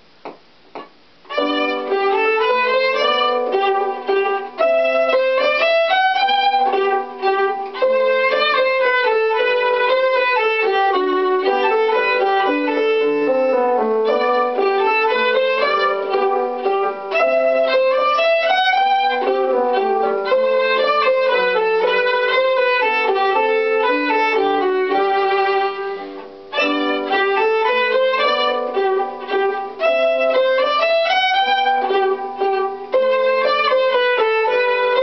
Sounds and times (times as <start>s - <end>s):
Violin, fiddle: 1.3s - 35.0s.